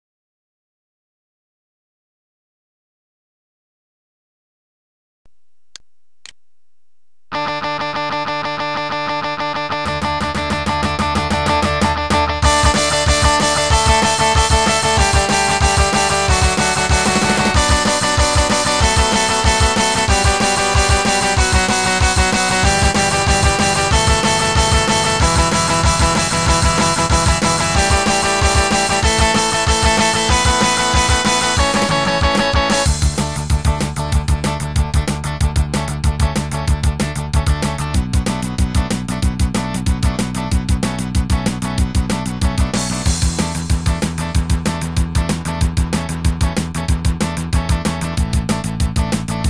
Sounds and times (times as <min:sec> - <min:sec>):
Electric guitar: 0:07.3 - 0:49.4.